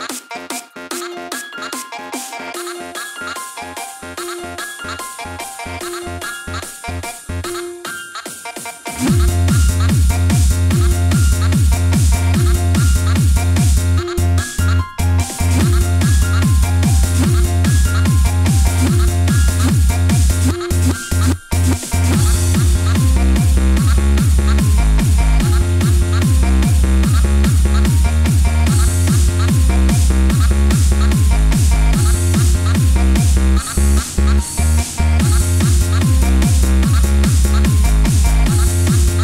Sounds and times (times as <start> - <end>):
Techno: 0.0 - 39.2.